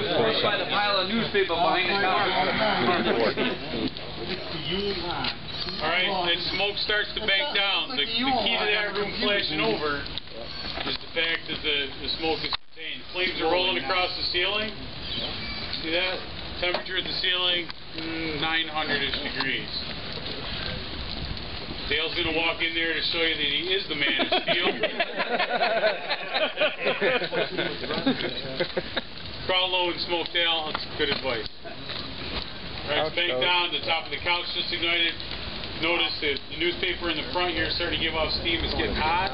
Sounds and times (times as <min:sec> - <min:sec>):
Speech: 0:00.0 - 0:14.8, 0:15.8 - 0:20.7, 0:21.9 - 0:25.0, 0:29.5 - 0:31.5, 0:32.8 - 0:35.2, 0:35.8 - 0:39.3
Fire: 0:00.0 - 0:39.3.